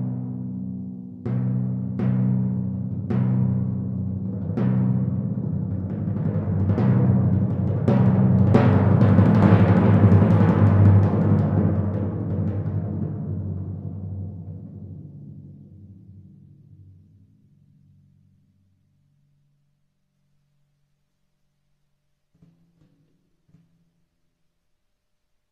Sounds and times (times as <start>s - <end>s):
Timpani: 0.0s - 17.2s.